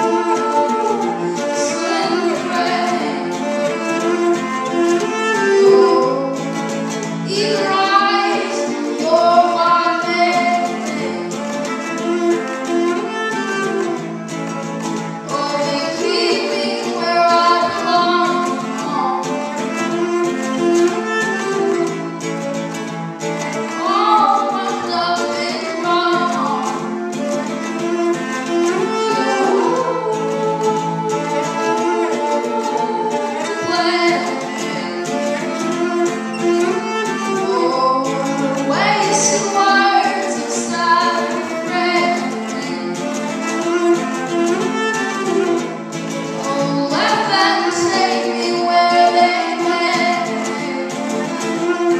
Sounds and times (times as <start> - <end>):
Music: 0.0 - 51.9.